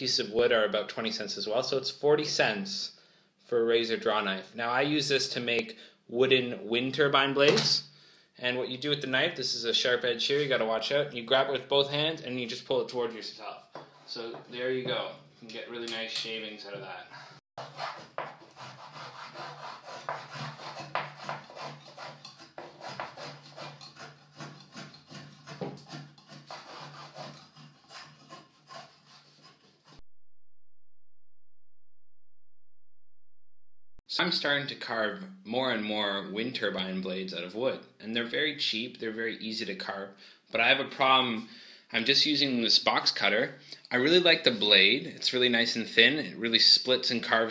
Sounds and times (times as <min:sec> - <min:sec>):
Speech: 0:00.0 - 0:17.2, 0:34.1 - 0:47.5.